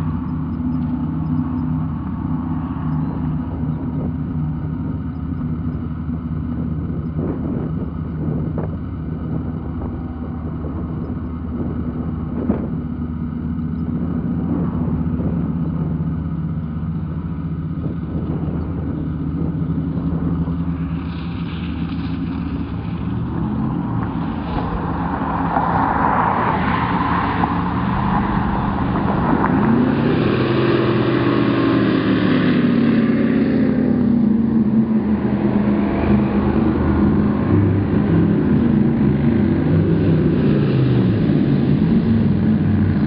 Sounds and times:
Motorboat, speedboat: 0:00.0 - 0:43.0.

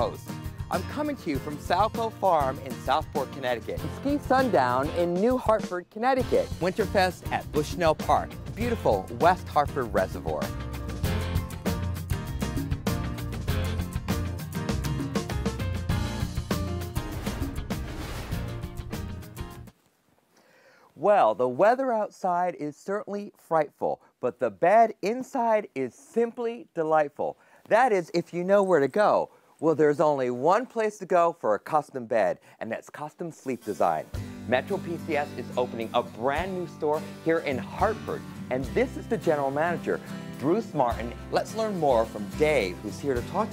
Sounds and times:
Speech: 0:00.0 - 0:10.5, 0:21.0 - 0:43.5
Music: 0:00.0 - 0:19.8, 0:33.5 - 0:43.5.

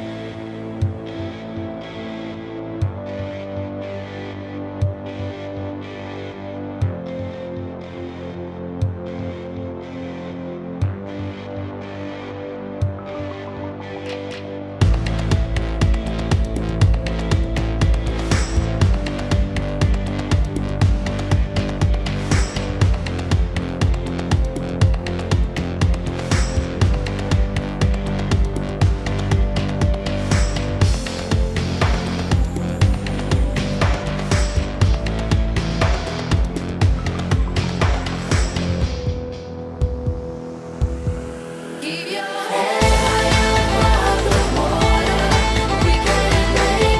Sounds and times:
Music: 0:00.0 - 0:47.0.

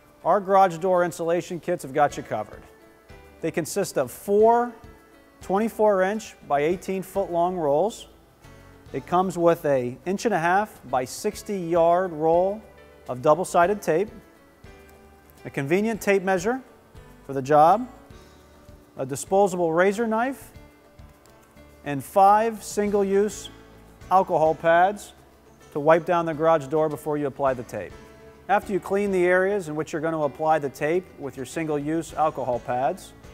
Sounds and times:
Music: 0:00.0 - 0:33.3
Speech: 0:00.2 - 0:02.7, 0:03.4 - 0:04.8, 0:05.4 - 0:08.1, 0:08.9 - 0:14.2, 0:15.4 - 0:16.7, 0:17.3 - 0:18.0, 0:19.0 - 0:20.5, 0:21.8 - 0:23.5, 0:24.1 - 0:25.2, 0:25.8 - 0:27.9, 0:28.5 - 0:33.1.

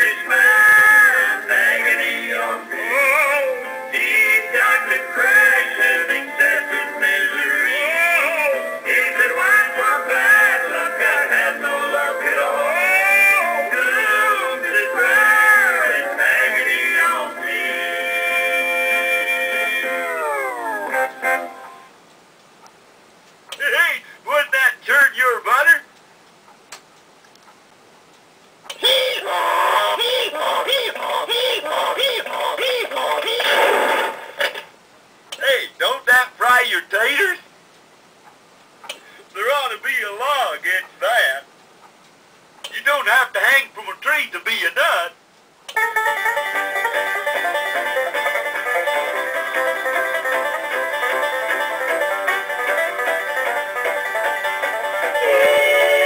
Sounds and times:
Speech: 0:23.5 - 0:25.9, 0:28.7 - 0:33.6, 0:35.4 - 0:37.5, 0:39.3 - 0:41.5, 0:42.7 - 0:45.2
Tick: 0:26.2 - 0:28.8.

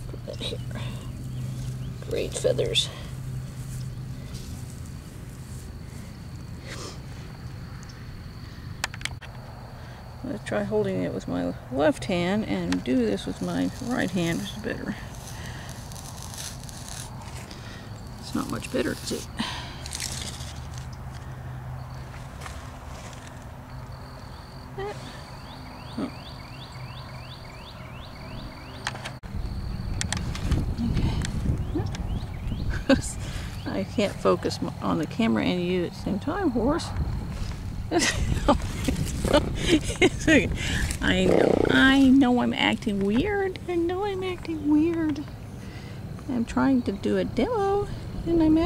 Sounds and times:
Speech: 0:02.1 - 0:03.0, 0:10.2 - 0:15.0, 0:33.7 - 0:37.0, 0:40.2 - 0:45.3, 0:46.3 - 0:48.6.

